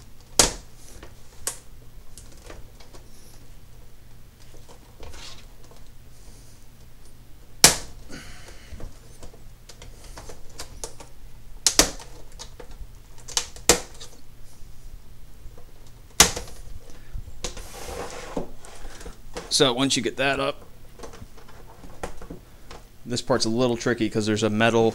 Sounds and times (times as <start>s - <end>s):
Inside, small room: 0.0s - 24.9s
Speech: 19.5s - 20.6s, 23.0s - 24.9s.